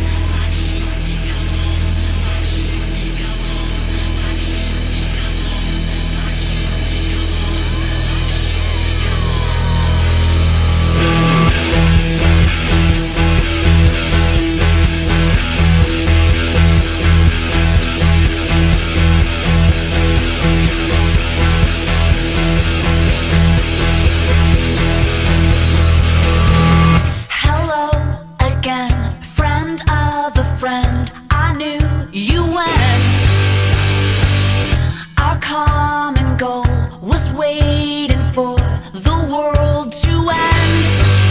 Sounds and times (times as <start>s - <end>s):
Music: 0.0s - 41.3s.